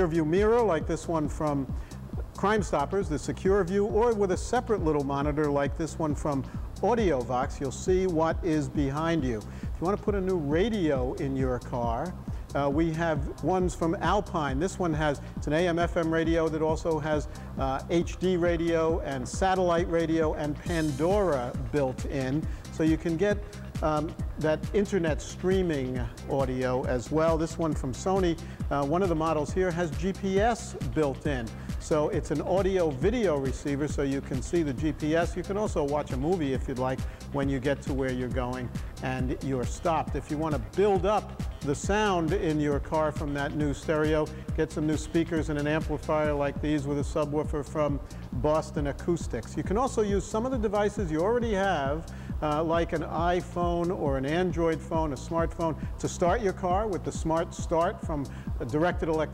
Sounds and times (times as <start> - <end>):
Speech: 0.0 - 1.7, 2.4 - 59.3
Music: 0.0 - 59.3.